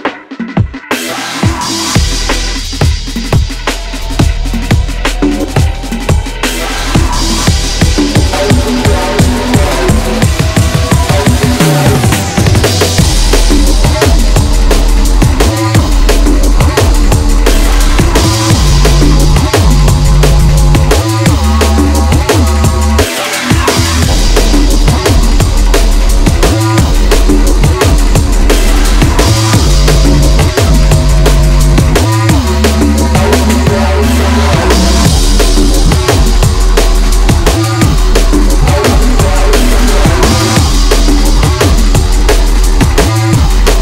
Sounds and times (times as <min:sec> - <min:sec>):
Drum and bass: 0:00.0 - 0:43.8.